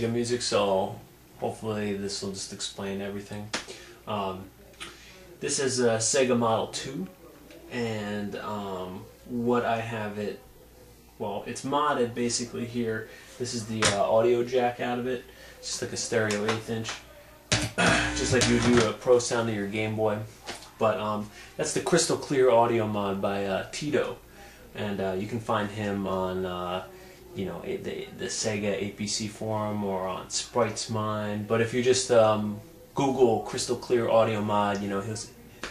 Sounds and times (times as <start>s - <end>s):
Speech: 0.0s - 35.7s.